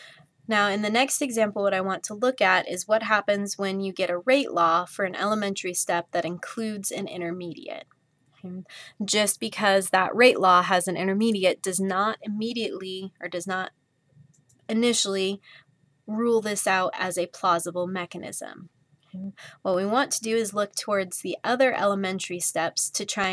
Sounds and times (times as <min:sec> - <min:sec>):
Speech: 0:00.5 - 0:07.8, 0:08.5 - 0:13.7, 0:14.7 - 0:15.4, 0:16.1 - 0:23.3.